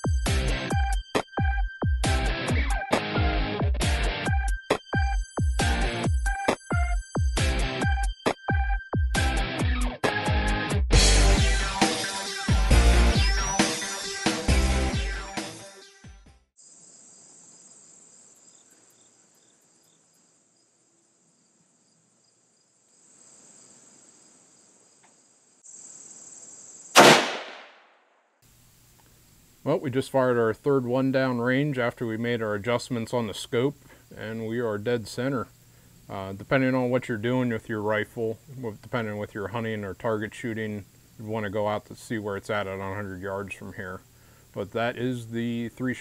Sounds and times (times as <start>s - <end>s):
Speech: 29.6s - 35.5s, 36.1s - 44.0s, 44.6s - 46.0s.